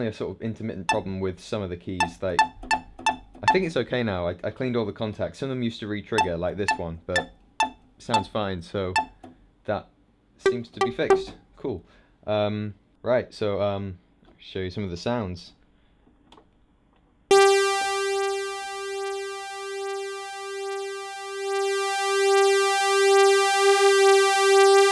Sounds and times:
Speech: 0:00.0 - 0:02.4, 0:03.4 - 0:07.3, 0:08.0 - 0:09.0, 0:09.7 - 0:15.6.

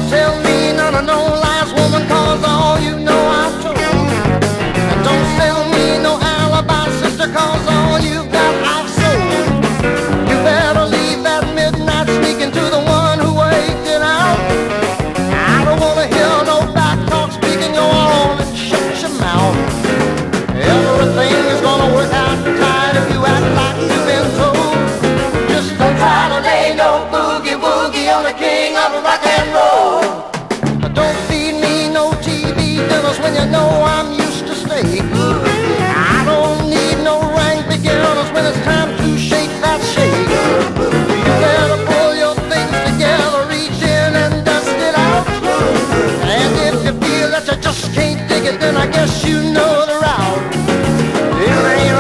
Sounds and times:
Rock and roll: 0:00.0 - 0:52.0.

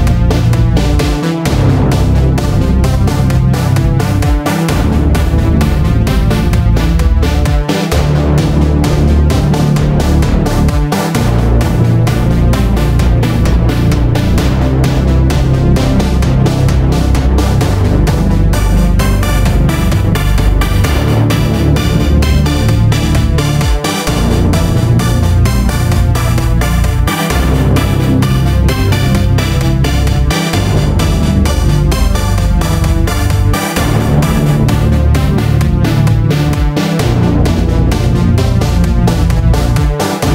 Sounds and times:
Techno: 0:00.0 - 0:40.3.

